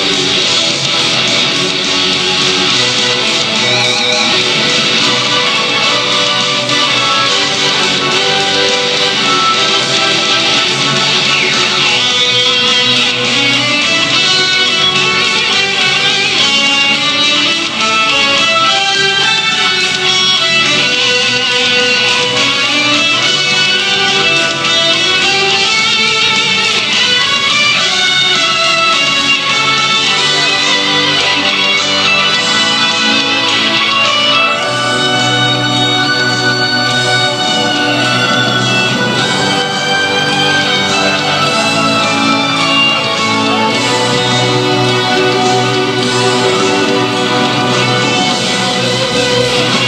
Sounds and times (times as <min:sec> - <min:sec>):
Soundtrack music: 0:00.0 - 0:49.8.